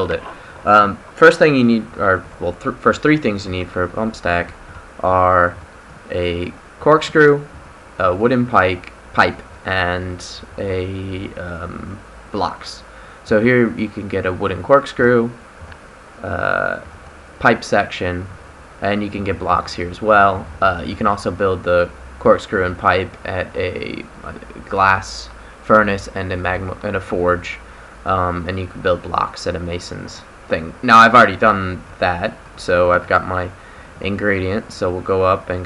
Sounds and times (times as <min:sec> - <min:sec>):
Speech: 0:00.0 - 0:15.4, 0:16.2 - 0:35.6.